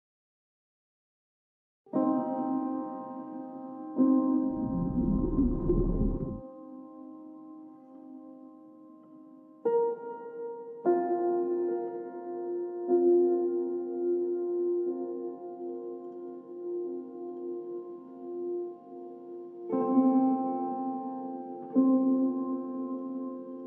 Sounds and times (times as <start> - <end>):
Music: 1.9 - 23.6.